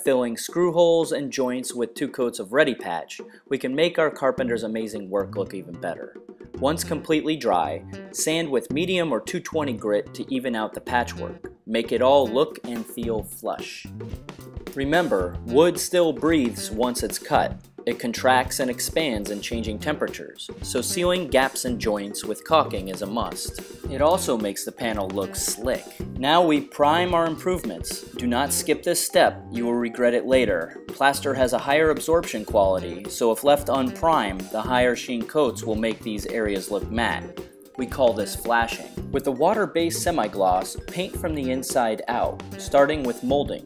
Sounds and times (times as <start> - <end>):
Speech: 0.0 - 13.9, 14.8 - 43.6
Music: 0.0 - 43.6.